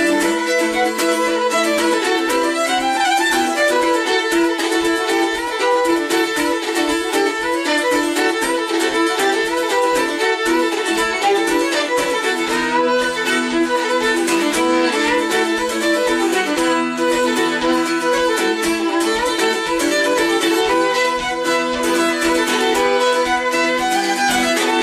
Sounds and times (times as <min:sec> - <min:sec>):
Violin, fiddle: 0:00.0 - 0:24.8.